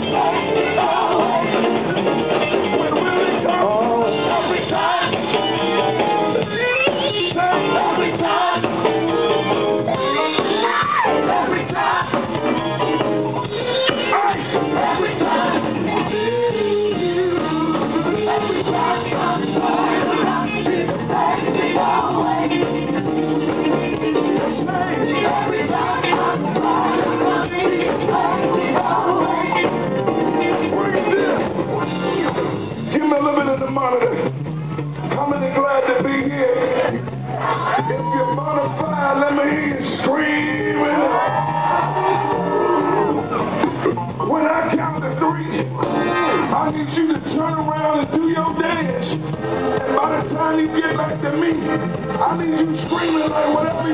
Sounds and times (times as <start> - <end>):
Music: 0.0 - 53.9.